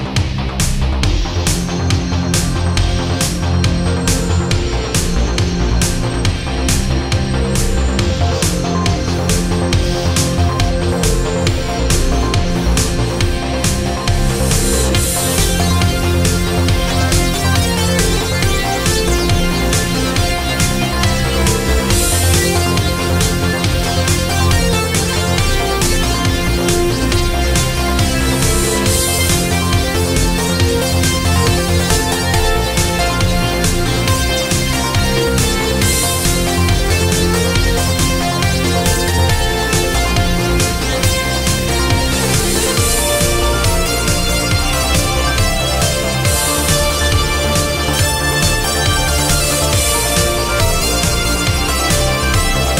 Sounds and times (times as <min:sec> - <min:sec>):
Music: 0:00.0 - 0:52.7.